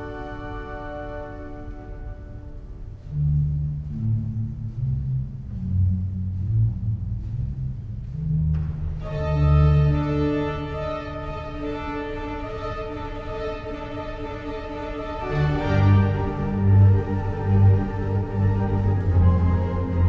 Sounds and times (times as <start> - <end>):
Music: 0.0 - 20.0.